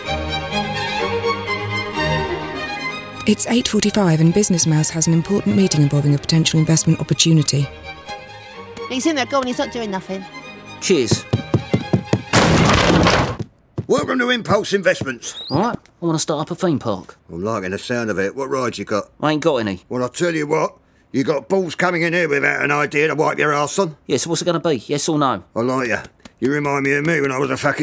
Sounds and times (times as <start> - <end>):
Music: 0.0 - 12.4.